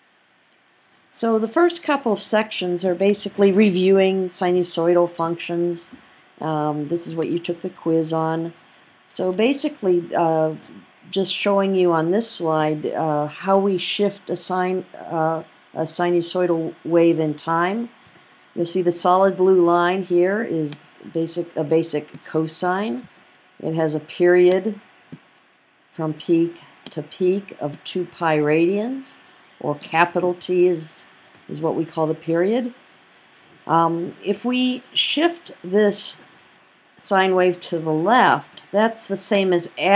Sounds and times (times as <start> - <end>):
Speech: 1.1 - 18.0, 18.6 - 24.8, 26.0 - 32.8, 33.7 - 36.2, 37.0 - 39.9.